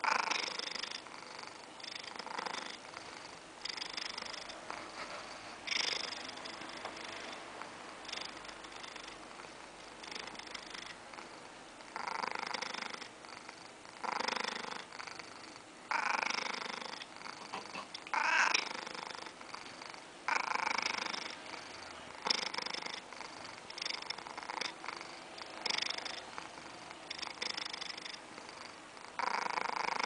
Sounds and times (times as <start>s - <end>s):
Snoring: 0.0s - 17.9s, 18.6s - 30.0s
Inside, small room: 0.0s - 30.0s
Purr: 0.0s - 30.0s.